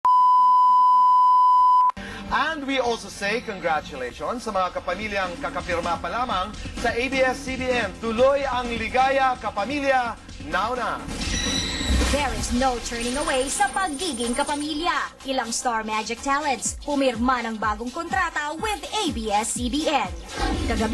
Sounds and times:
Music: 0:02.0 - 0:20.9.

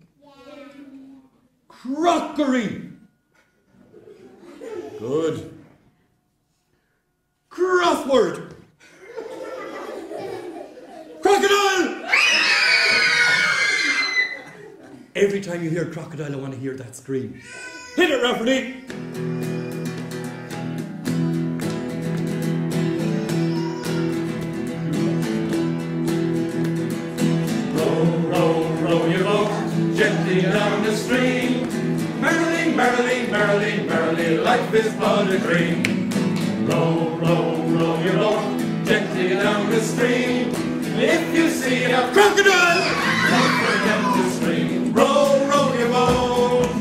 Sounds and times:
Speech: 0:07.5 - 0:08.5, 0:11.2 - 0:12.0, 0:15.2 - 0:18.8.

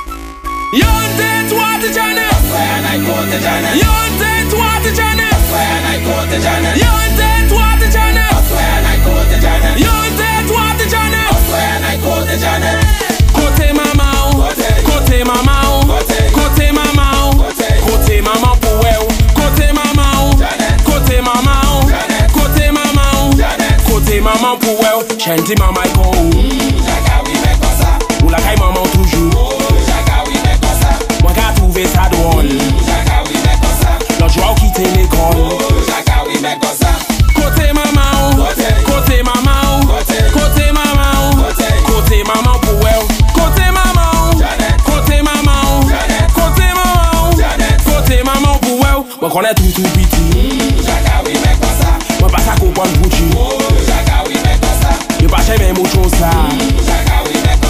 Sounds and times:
Music: 0:00.0 - 0:57.7.

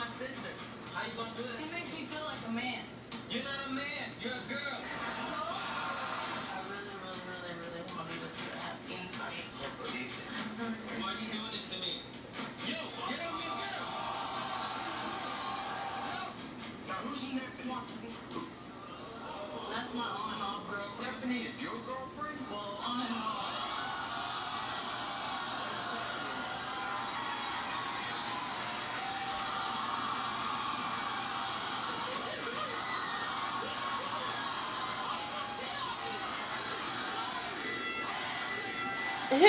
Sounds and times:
Screaming: 0:13.6 - 0:16.4, 0:23.4 - 0:39.3.

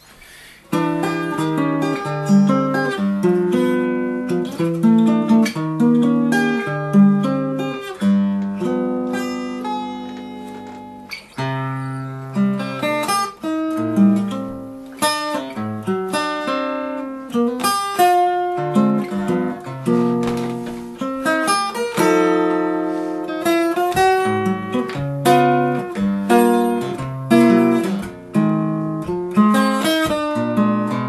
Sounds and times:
Acoustic guitar: 0:00.0 - 0:31.0
Strum: 0:00.0 - 0:31.0.

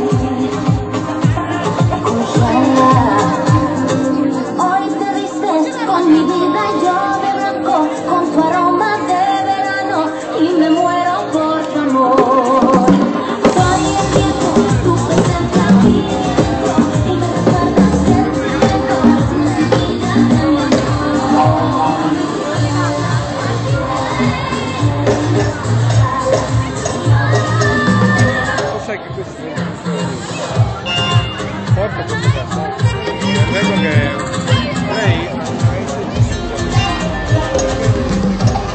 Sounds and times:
Dance music: 0:00.0 - 0:38.7
Speech: 0:00.1 - 0:13.0, 0:13.6 - 0:38.7.

